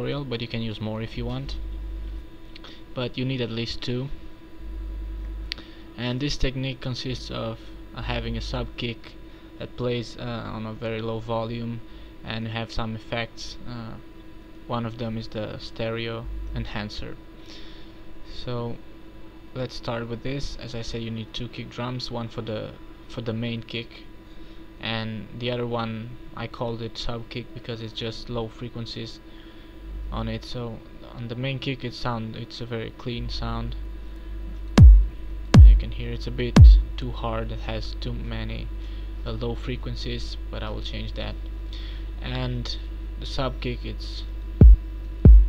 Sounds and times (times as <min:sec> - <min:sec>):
Speech: 0:00.0 - 0:01.7, 0:03.0 - 0:04.2, 0:06.0 - 0:14.1, 0:14.7 - 0:17.2, 0:18.3 - 0:18.9, 0:19.5 - 0:24.1, 0:24.8 - 0:29.2, 0:30.1 - 0:33.8, 0:35.6 - 0:41.5, 0:42.2 - 0:44.4.